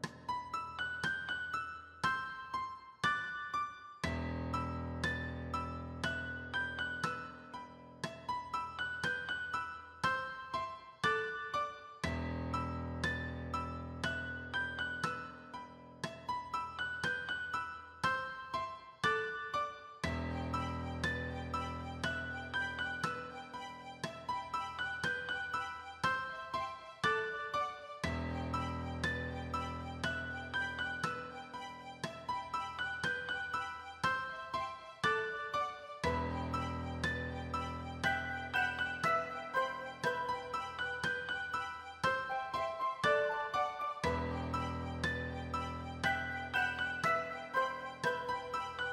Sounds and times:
Music: 0.0 - 48.9.

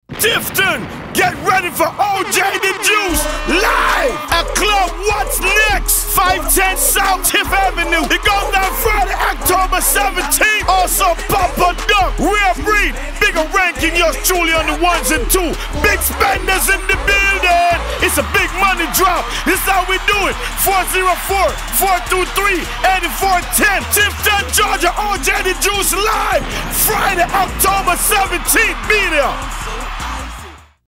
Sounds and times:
Speech: 0.2 - 29.4
Music: 2.2 - 30.8.

